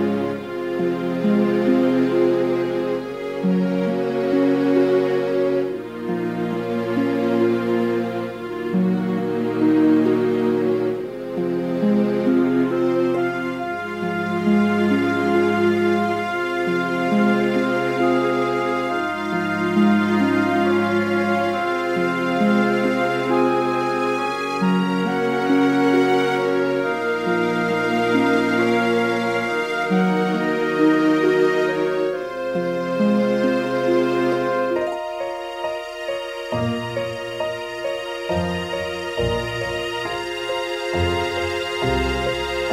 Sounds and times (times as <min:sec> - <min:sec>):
Background music: 0:00.0 - 0:42.7
Sad music: 0:00.0 - 0:42.7.